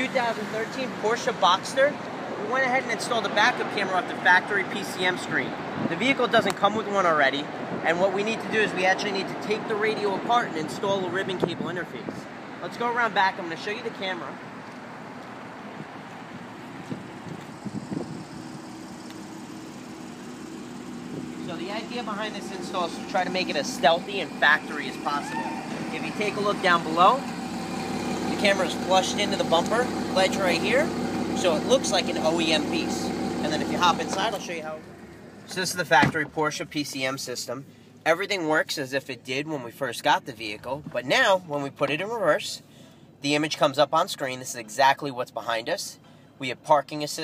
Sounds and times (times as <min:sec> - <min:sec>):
Speech: 0:00.0 - 0:14.4, 0:21.5 - 0:27.3, 0:28.3 - 0:34.8, 0:35.5 - 0:42.6, 0:43.2 - 0:47.2.